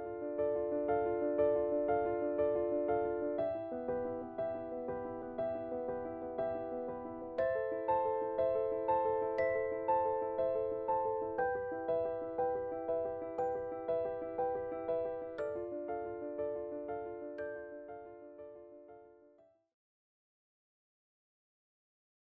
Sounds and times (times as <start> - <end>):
Music: 0.0 - 19.8.